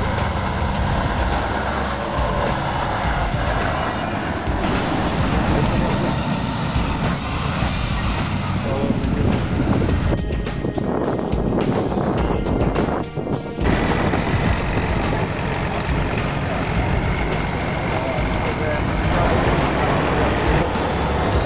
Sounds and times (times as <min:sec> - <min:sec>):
Music: 0:00.0 - 0:21.4
Truck: 0:00.0 - 0:21.4.